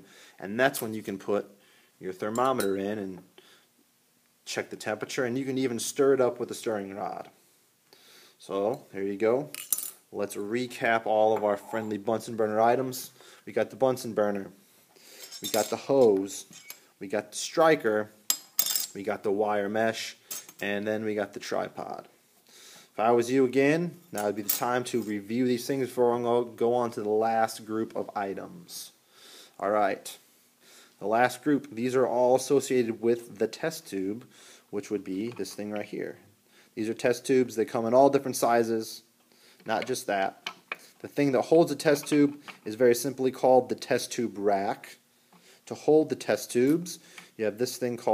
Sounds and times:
Cutlery, silverware: 16.5 - 16.8, 18.3 - 18.9, 20.3 - 20.6.

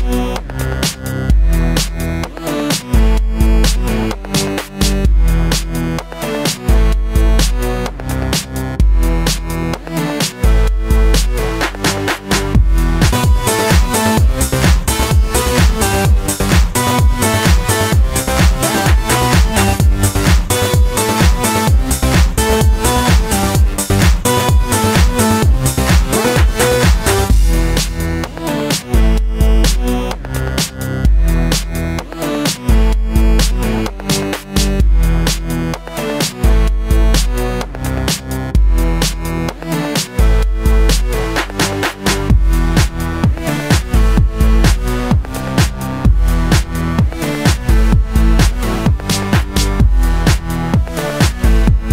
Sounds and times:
Music: 0.0 - 51.9.

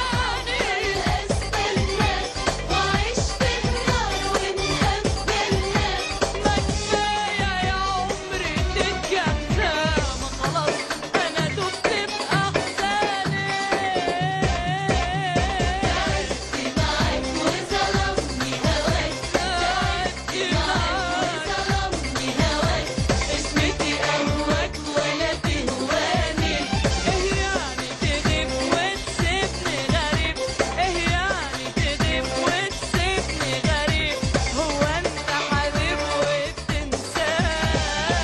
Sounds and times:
Music of Asia: 0.0 - 38.2.

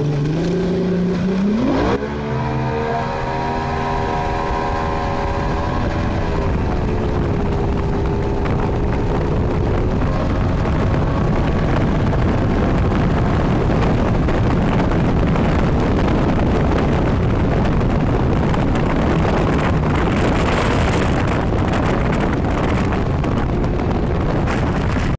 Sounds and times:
Motorboat, speedboat: 0.0 - 25.1.

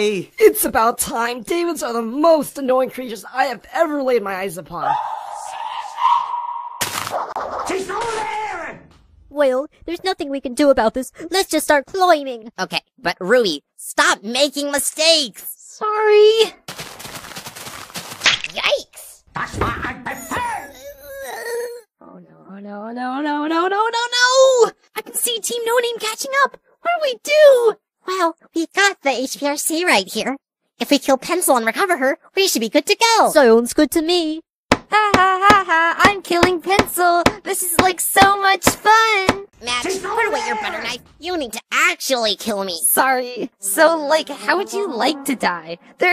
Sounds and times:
Speech: 0.0 - 5.6, 7.7 - 8.8, 9.4 - 16.6, 18.5 - 20.8, 22.0 - 34.4, 35.0 - 46.1.

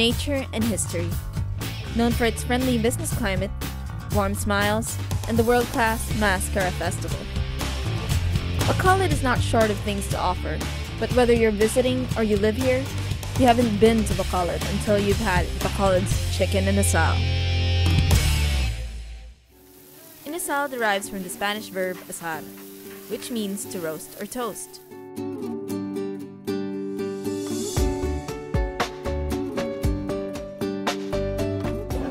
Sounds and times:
Speech: 0.0 - 1.2, 1.9 - 3.5, 4.1 - 7.2, 8.6 - 17.2, 20.2 - 22.5, 23.1 - 24.8
Music: 0.0 - 32.1.

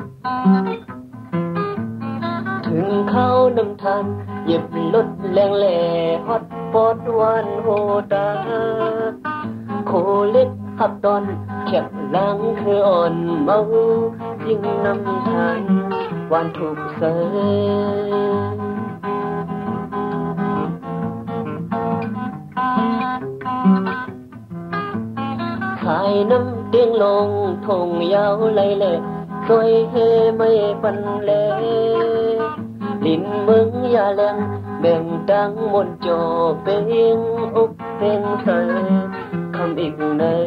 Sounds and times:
Music: 0.0 - 40.4.

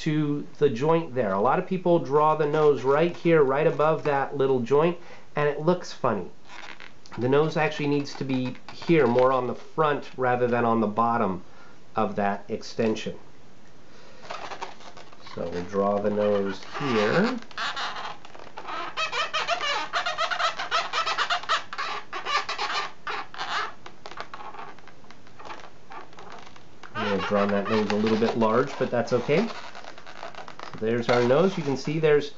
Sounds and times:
Speech: 0.0 - 6.4, 7.2 - 11.4, 12.0 - 13.2, 15.2 - 17.4, 27.0 - 29.6, 30.8 - 32.3
Inside, small room: 0.0 - 32.3.

